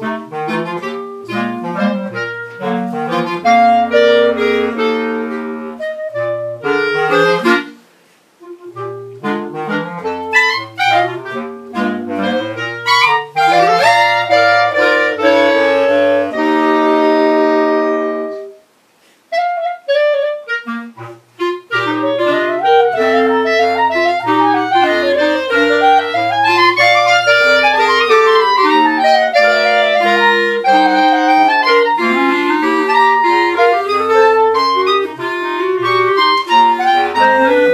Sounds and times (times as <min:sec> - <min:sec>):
Clarinet: 0:00.0 - 0:37.7.